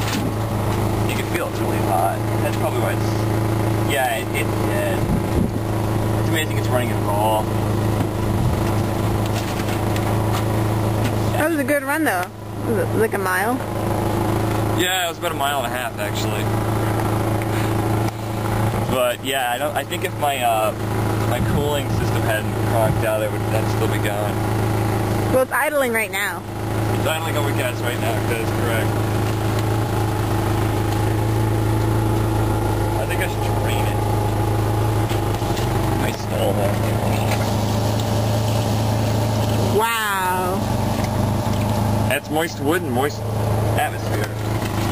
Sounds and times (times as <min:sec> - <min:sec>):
Speech: 0:18.9 - 0:24.3, 0:27.0 - 0:28.9, 0:33.0 - 0:34.0, 0:36.0 - 0:37.5, 0:42.1 - 0:43.2, 0:43.8 - 0:44.4.